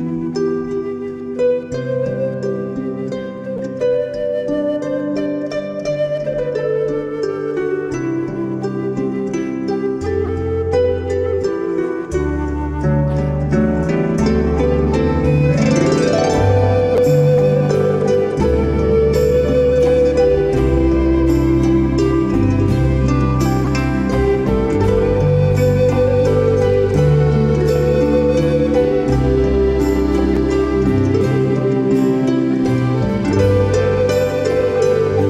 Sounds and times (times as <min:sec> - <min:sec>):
Harp: 0:00.0 - 0:35.2
Pizzicato: 0:00.0 - 0:35.2.